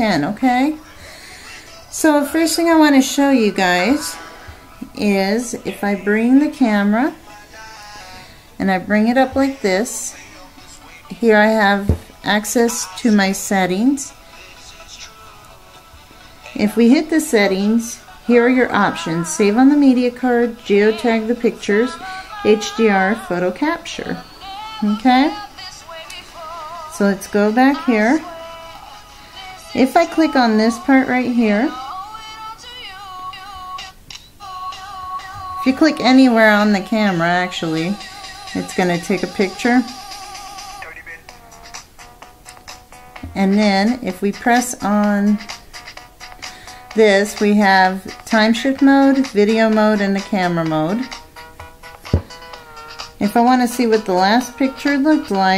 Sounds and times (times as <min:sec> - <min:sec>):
Speech: 0:00.0 - 0:00.8, 0:02.0 - 0:04.2, 0:05.0 - 0:07.2, 0:11.1 - 0:14.1, 0:16.6 - 0:24.2, 0:24.8 - 0:25.4, 0:27.0 - 0:28.2, 0:29.8 - 0:31.8, 0:35.6 - 0:38.0, 0:38.6 - 0:39.9, 0:43.4 - 0:45.5, 0:47.0 - 0:51.1, 0:53.2 - 0:55.5
Music: 0:00.0 - 0:55.5.